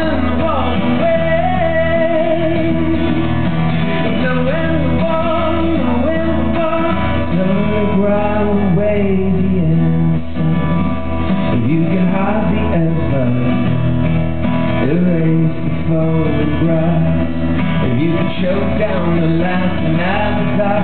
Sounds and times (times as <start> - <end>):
Music: 0.0 - 20.8.